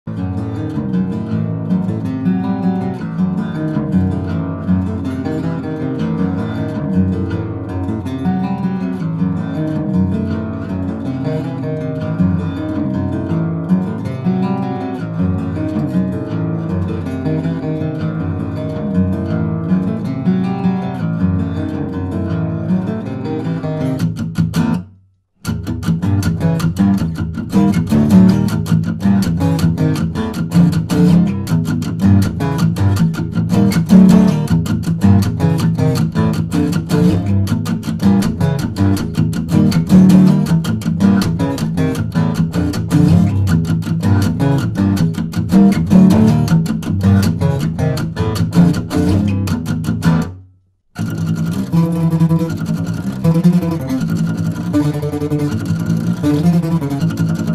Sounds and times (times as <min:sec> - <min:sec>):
Acoustic guitar: 0:00.1 - 0:57.5.